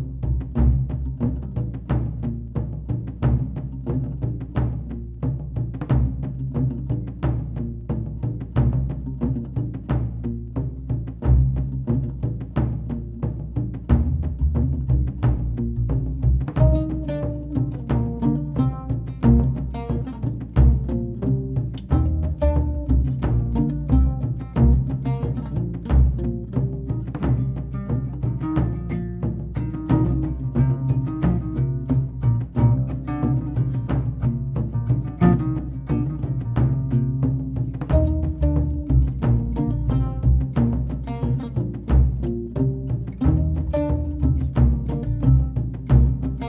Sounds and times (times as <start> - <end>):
Music: 0.0 - 46.4.